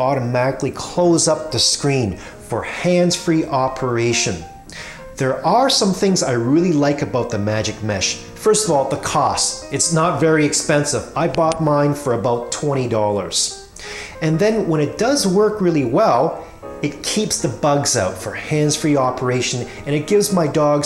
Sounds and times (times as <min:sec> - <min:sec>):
Speech: 0:00.0 - 0:04.5, 0:05.2 - 0:13.6, 0:14.2 - 0:20.8
Music: 0:00.0 - 0:20.8.